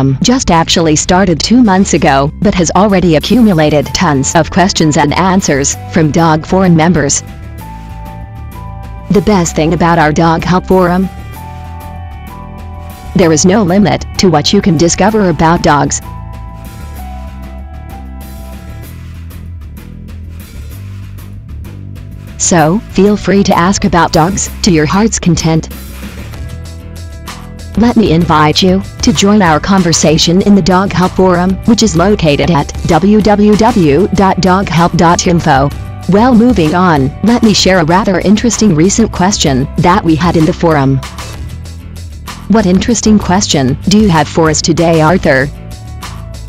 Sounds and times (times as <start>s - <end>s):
Speech: 0.0s - 7.2s, 9.1s - 11.1s, 13.2s - 16.0s, 22.4s - 25.7s, 27.8s - 41.0s, 42.5s - 45.5s
Music: 0.0s - 46.4s.